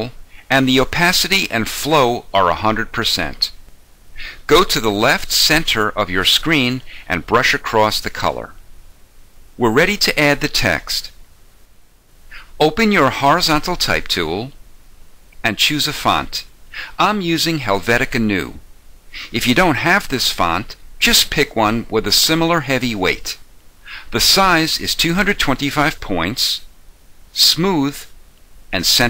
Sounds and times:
Narration, monologue: 0.0s - 29.1s.

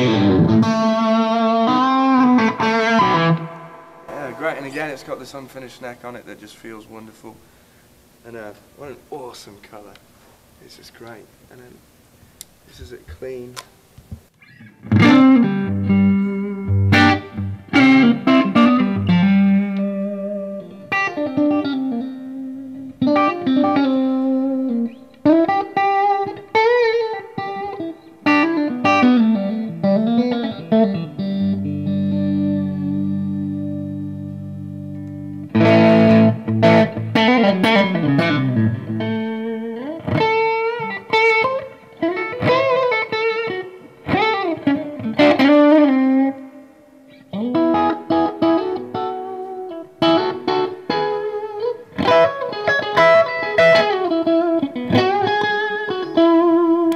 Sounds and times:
Guitar: 0.0s - 56.9s
Inside, small room: 0.0s - 56.9s.

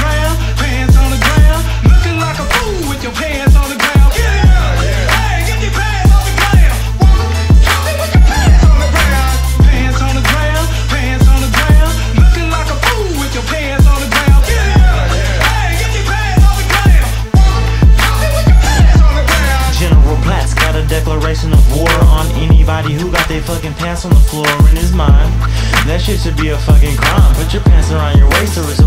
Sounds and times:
Hip hop music: 0.0s - 28.8s
Rapping: 0.0s - 28.8s.

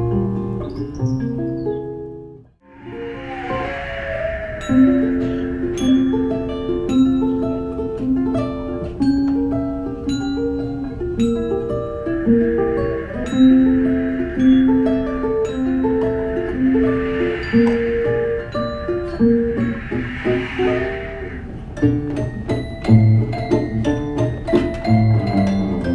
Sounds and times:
Music: 0.1s - 25.9s.

